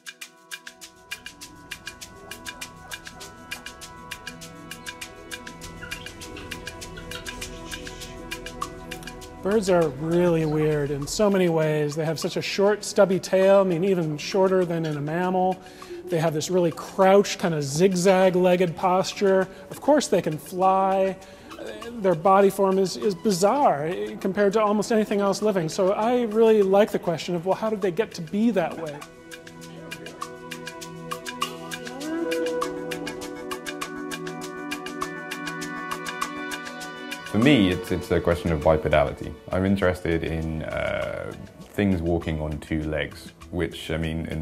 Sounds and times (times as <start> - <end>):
Music: 0.0 - 44.4
Speech: 9.4 - 29.0, 37.3 - 44.4.